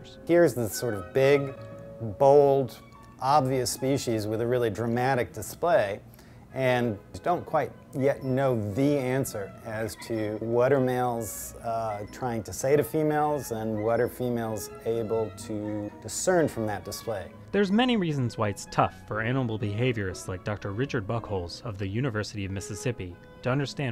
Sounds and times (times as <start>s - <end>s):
Speech: 0.0s - 6.0s, 6.6s - 23.9s
Music: 0.0s - 23.9s.